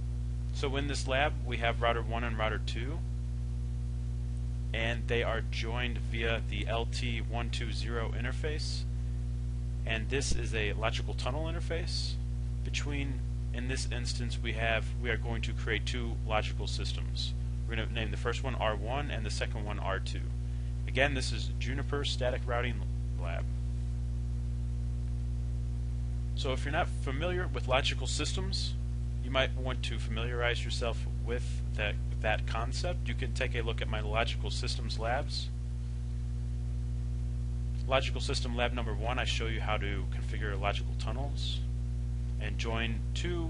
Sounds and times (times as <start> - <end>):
Speech: 0.6 - 3.1, 4.7 - 8.9, 9.8 - 23.5, 26.4 - 35.6, 37.8 - 41.7, 42.4 - 43.5.